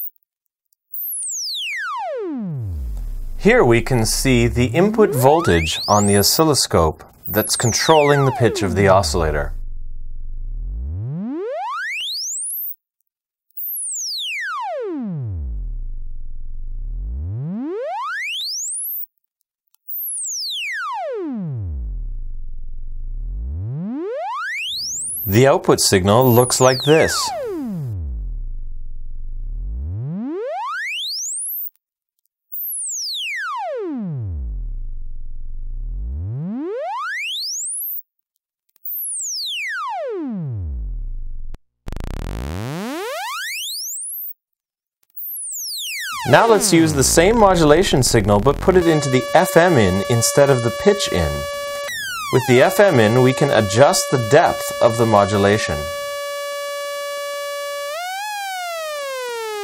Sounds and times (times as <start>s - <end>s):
Synthesizer: 2.3s - 9.7s, 24.6s - 28.0s, 46.1s - 59.6s
Speech: 3.4s - 9.6s, 25.3s - 27.4s, 46.2s - 51.6s, 52.3s - 56.0s.